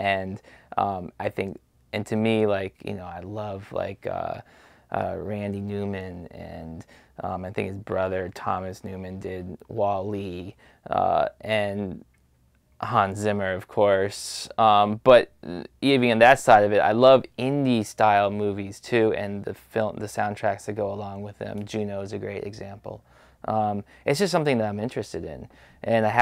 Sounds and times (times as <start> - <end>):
Speech: 0.0 - 12.1, 12.8 - 26.2.